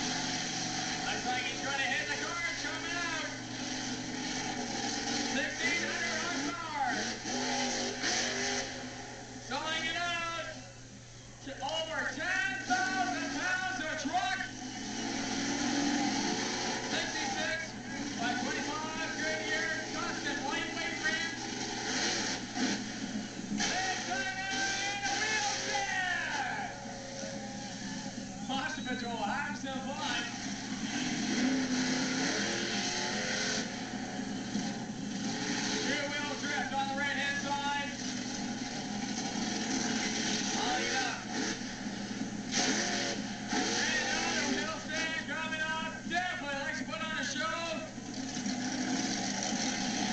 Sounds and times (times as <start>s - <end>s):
Vehicle: 0.0s - 50.1s
Speech: 1.1s - 3.4s, 11.4s - 14.5s, 16.9s - 21.4s, 28.5s - 30.4s, 35.8s - 38.0s, 43.8s - 47.9s.